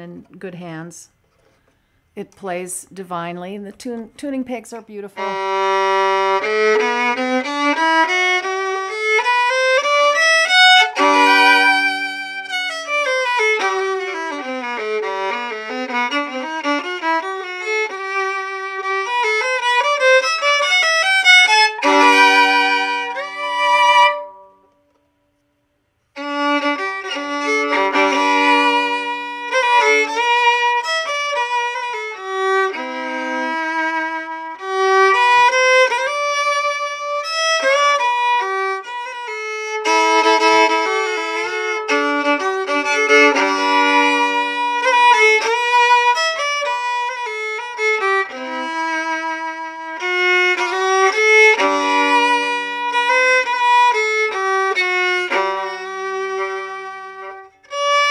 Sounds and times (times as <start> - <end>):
Violin, fiddle: 5.2 - 24.6, 26.2 - 58.1.